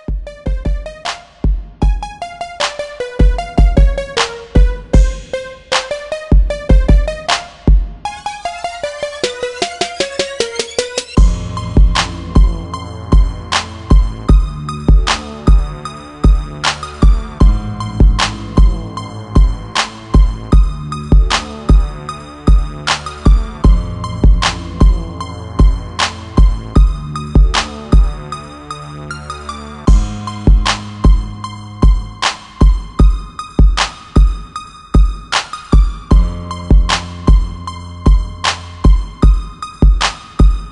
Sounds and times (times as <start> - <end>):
Music: 0.0 - 40.7.